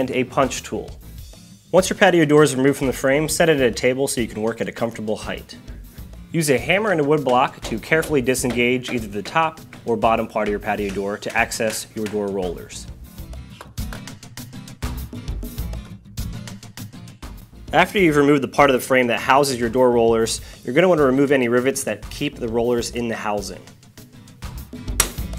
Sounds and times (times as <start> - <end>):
Speech: 0.0 - 1.0, 1.7 - 5.6, 6.3 - 12.9, 17.7 - 23.7
Music: 0.0 - 25.3.